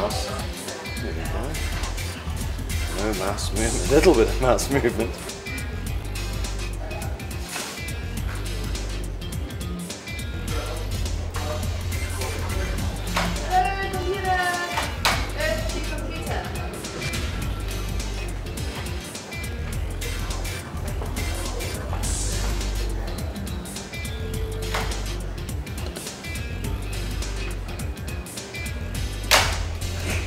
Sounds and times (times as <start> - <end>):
Music: 0.0 - 30.2
Speech: 2.9 - 5.3, 10.5 - 17.0.